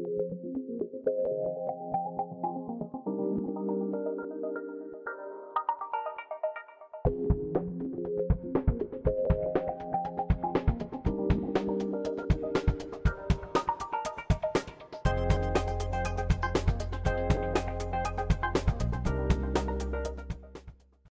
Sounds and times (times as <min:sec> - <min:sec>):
Music: 0:00.0 - 0:21.1.